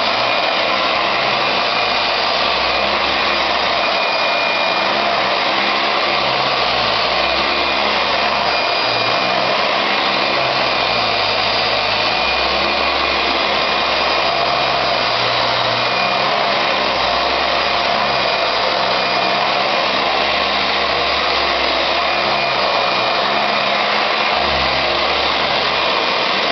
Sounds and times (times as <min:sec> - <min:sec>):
Inside, small room: 0:00.0 - 0:26.5
Vacuum cleaner: 0:00.0 - 0:26.5.